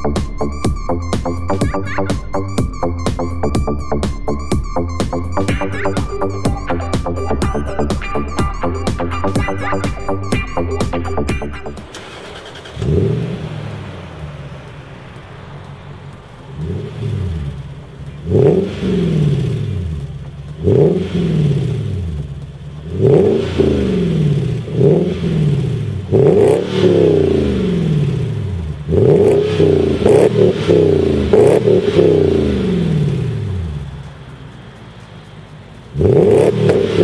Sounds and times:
Car: 0.0 - 37.0
Accelerating, revving, vroom: 11.9 - 14.3, 16.5 - 22.2, 22.8 - 33.9, 35.9 - 37.0.

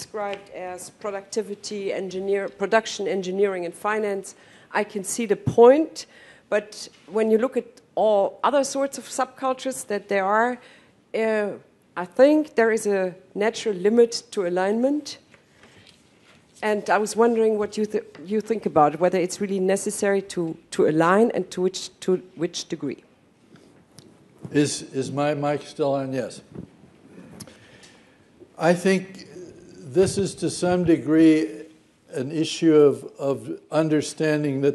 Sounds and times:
Female speech, woman speaking: 0.0 - 10.6, 11.2 - 15.2, 16.6 - 23.0
Narration, monologue: 0.0 - 34.7.

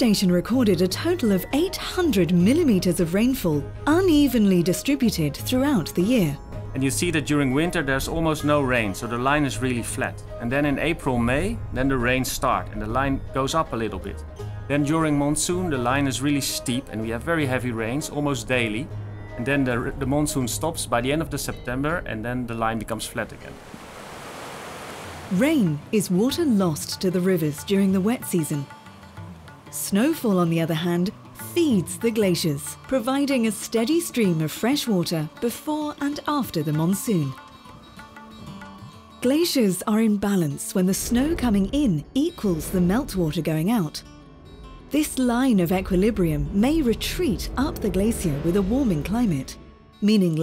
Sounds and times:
Speech: 0.0 - 23.5, 25.3 - 28.6, 45.0 - 50.4
Music: 0.0 - 23.6, 25.3 - 50.4
Water: 23.1 - 26.2.

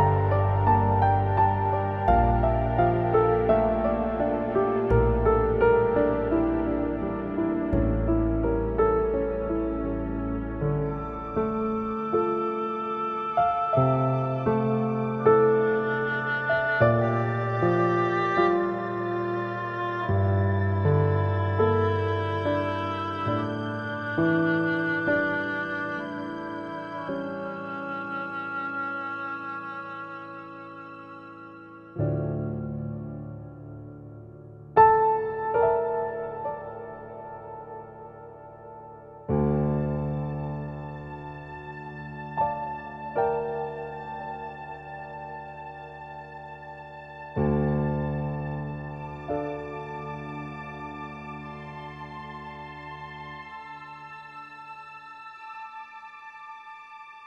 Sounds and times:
Background music: 0.0 - 57.2.

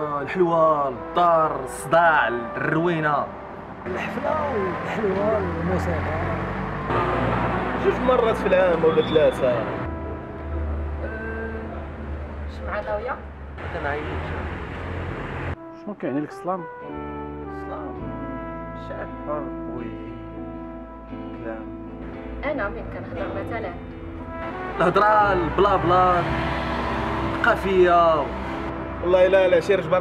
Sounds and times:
Music: 0.0 - 30.0.

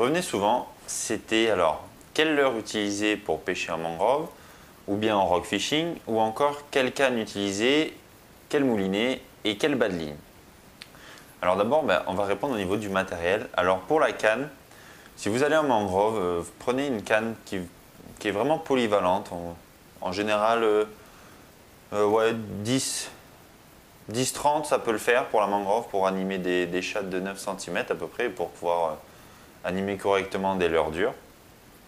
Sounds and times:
Speech: 0.0 - 10.2, 11.4 - 14.6, 15.2 - 21.0, 21.9 - 23.2, 24.1 - 31.3.

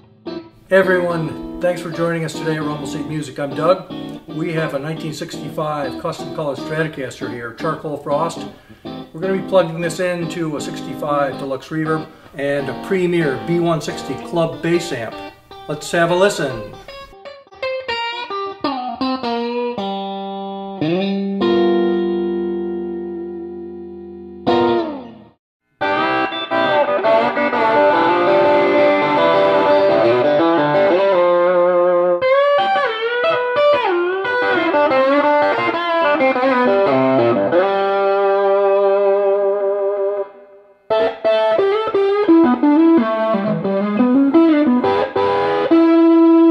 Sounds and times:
Guitar: 0.0 - 46.5
Speech: 0.7 - 8.5, 9.2 - 16.8.

